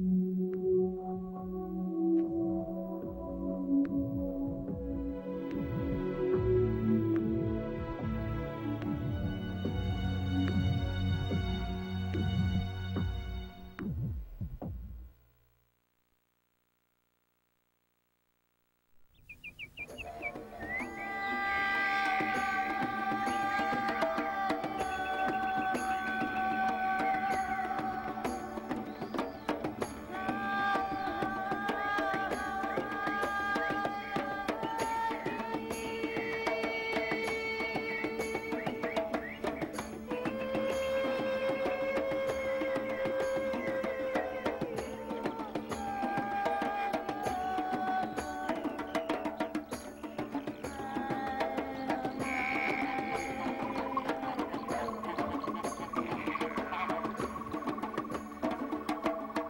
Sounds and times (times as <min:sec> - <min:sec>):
Music: 0:00.0 - 0:15.2, 0:19.8 - 0:59.4.